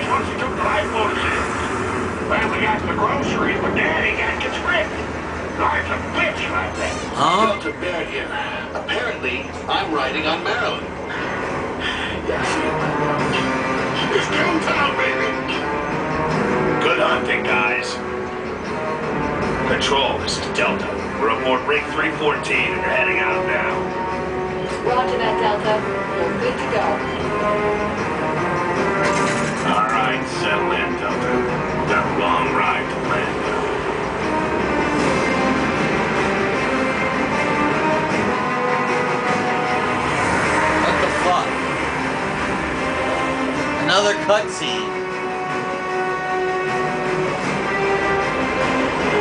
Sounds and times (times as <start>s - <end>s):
Music: 0.0s - 49.2s.